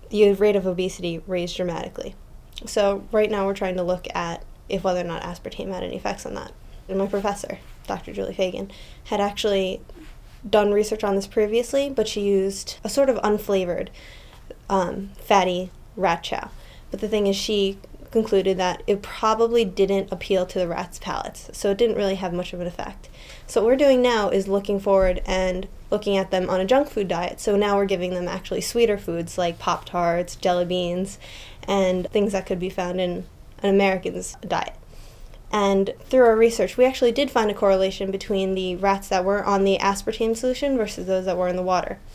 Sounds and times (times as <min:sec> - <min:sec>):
Speech: 0:00.1 - 0:13.9, 0:14.5 - 0:34.8, 0:35.5 - 0:42.0.